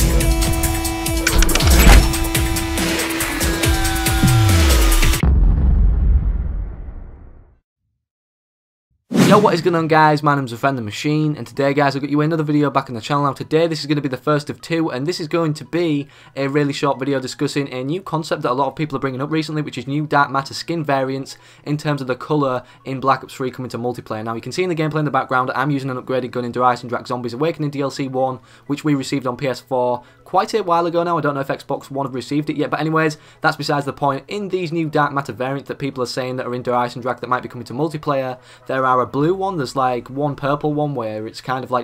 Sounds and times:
Sound effect: 5.2 - 7.6.

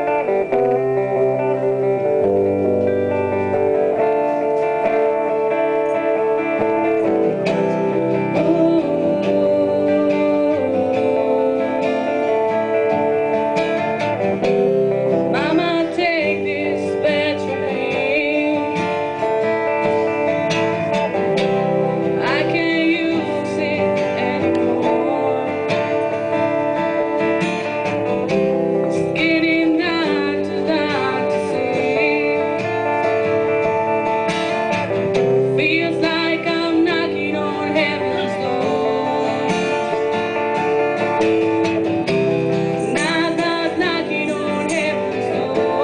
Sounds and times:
Music: 0.0 - 45.8.

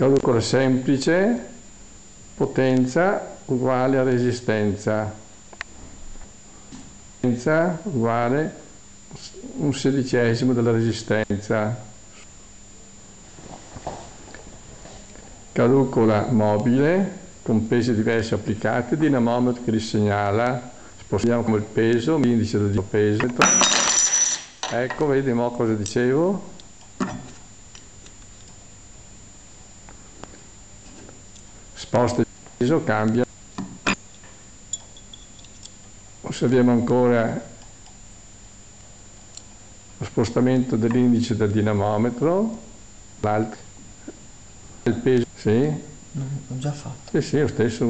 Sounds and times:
Speech: 0.0 - 1.6, 2.4 - 5.3, 7.2 - 12.0, 15.6 - 23.5, 24.7 - 26.6, 31.8 - 33.3, 36.2 - 37.6, 40.0 - 43.7, 44.8 - 47.8.

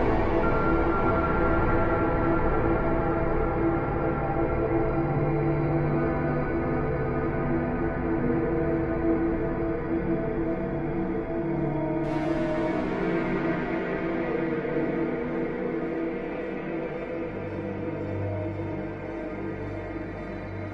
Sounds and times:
Music: 0.0 - 20.7.

